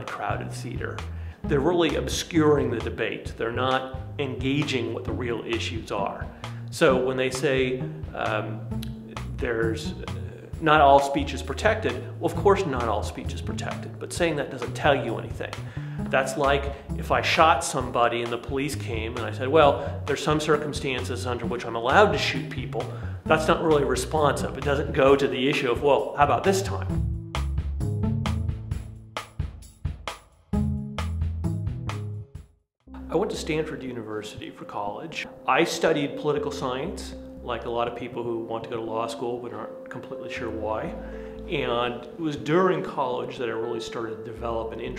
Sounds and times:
Male speech, man speaking: 0.0 - 27.0, 33.0 - 44.9
Narration, monologue: 0.0 - 31.9, 32.9 - 44.9
Music: 0.0 - 44.9.

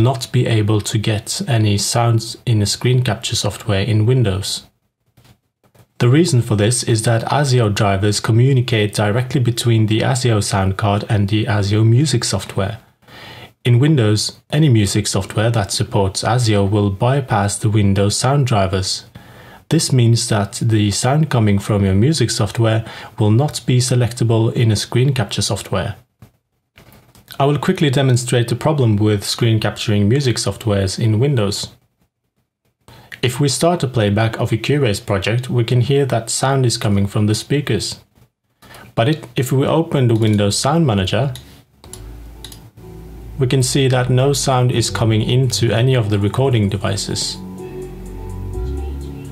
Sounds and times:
Speech: 0.0 - 4.7, 6.0 - 12.9, 13.6 - 19.1, 19.7 - 26.1, 27.3 - 31.8, 33.2 - 38.1, 38.9 - 41.4, 43.4 - 47.4.

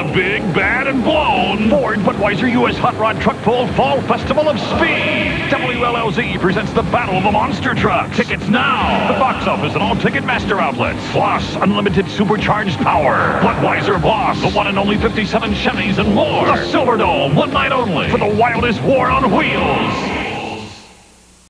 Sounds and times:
Speech: 0.0 - 20.9.

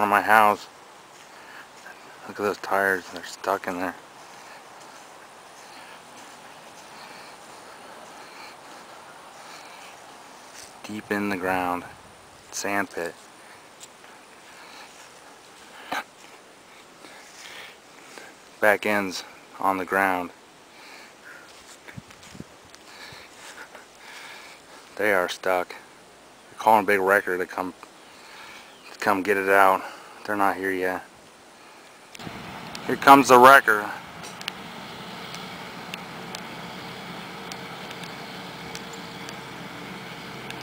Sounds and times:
Speech: 0.0 - 0.7, 2.2 - 4.0, 10.8 - 11.9, 12.5 - 13.2, 18.6 - 20.4, 25.0 - 25.8, 26.6 - 27.8, 29.0 - 31.1, 32.9 - 34.0
Vehicle: 1.8 - 11.9, 32.2 - 40.6.

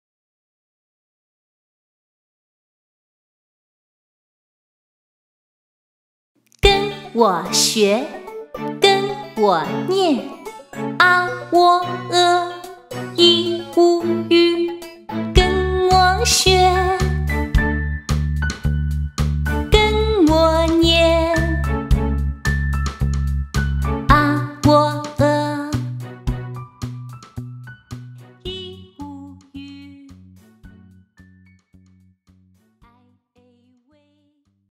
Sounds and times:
Music: 6.6 - 34.7
Female singing: 6.7 - 8.1, 11.0 - 17.2, 19.8 - 21.6, 24.1 - 25.8, 28.5 - 30.2, 32.9 - 34.4.

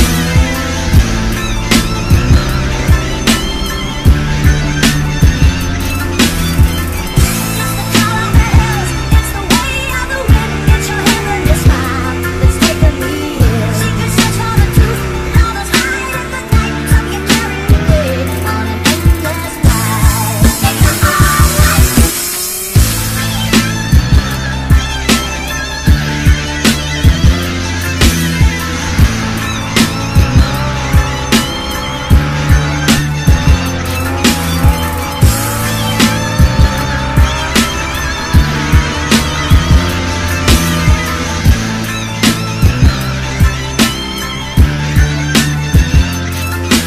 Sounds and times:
Motorcycle: 0.0 - 46.8.

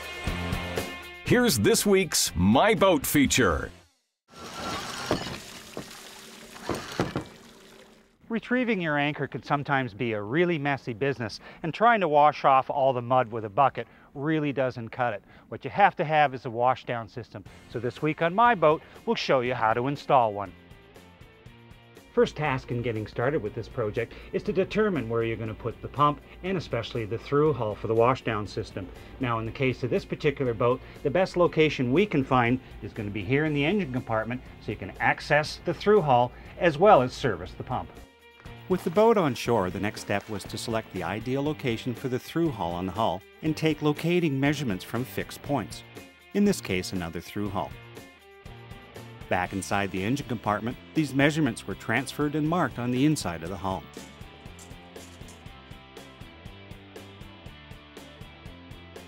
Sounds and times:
Music: 0.0 - 4.2, 16.8 - 59.0
Speech: 1.3 - 3.8, 8.3 - 20.5, 22.2 - 38.0, 38.7 - 45.8, 46.4 - 47.8, 49.3 - 53.9.

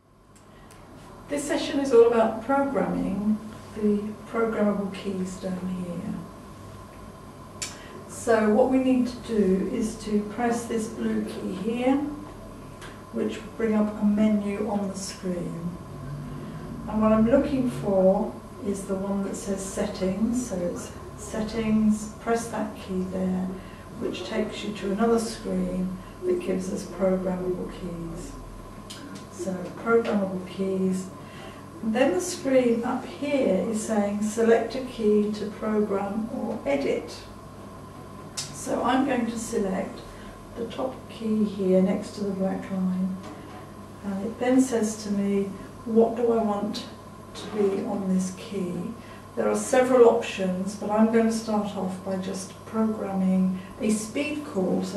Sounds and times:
Speech: 1.3 - 6.3, 8.1 - 12.3, 13.1 - 15.8, 16.8 - 31.2, 31.8 - 37.4, 38.4 - 43.2, 44.0 - 54.9.

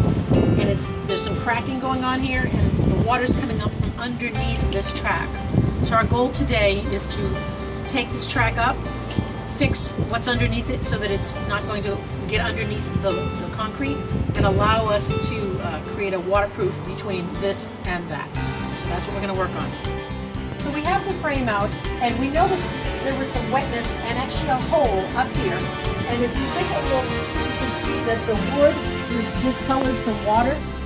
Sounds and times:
Music: 0.0 - 30.8
Speech: 0.6 - 5.3, 5.9 - 8.8, 9.6 - 19.8, 20.6 - 30.6.

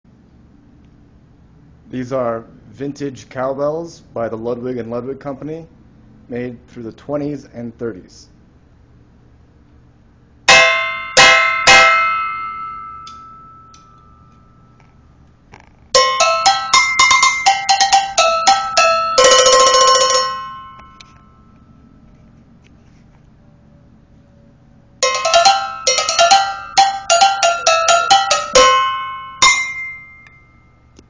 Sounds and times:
Cowbell: 10.5 - 14.7, 16.0 - 21.6, 25.0 - 30.8.

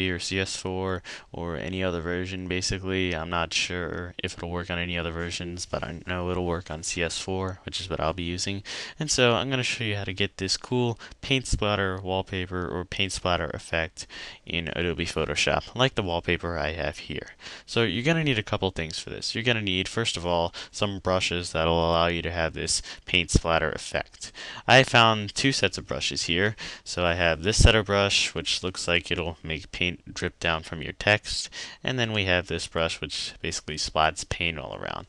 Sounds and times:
Speech: 0.0 - 35.0.

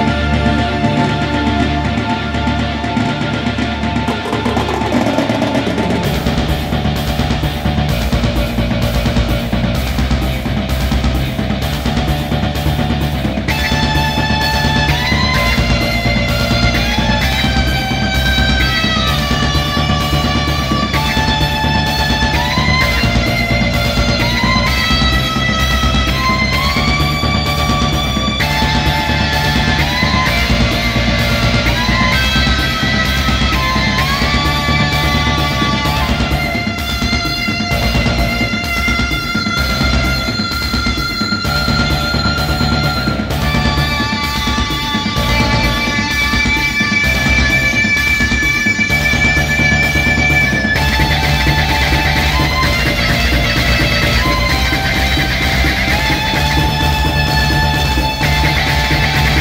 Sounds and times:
Music: 0.0 - 59.4.

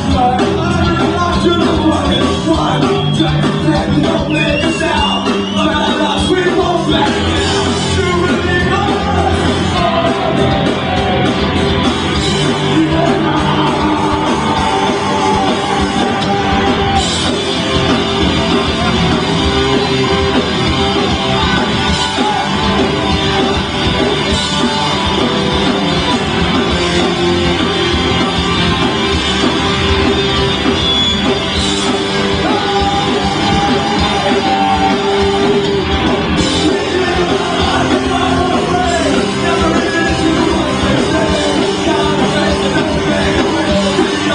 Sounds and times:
Crowd: 0.0 - 44.3
Rock music: 0.0 - 44.3.

